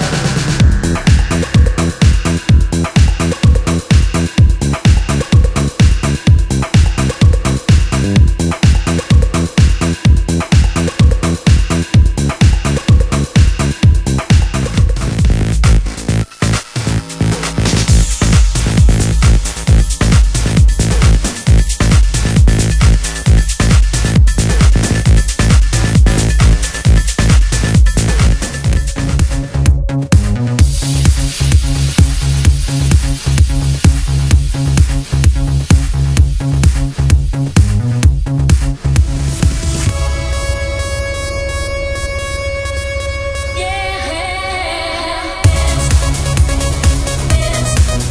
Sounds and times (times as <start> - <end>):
House music: 0.0 - 48.1
Techno: 0.0 - 48.1.